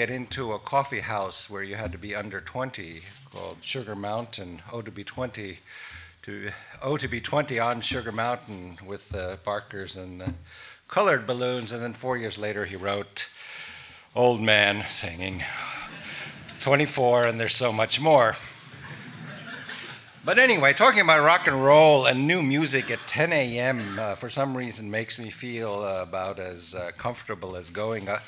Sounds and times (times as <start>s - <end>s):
Speech: 0.0s - 5.6s, 6.2s - 13.4s, 14.2s - 15.9s, 16.6s - 18.5s, 20.2s - 28.2s.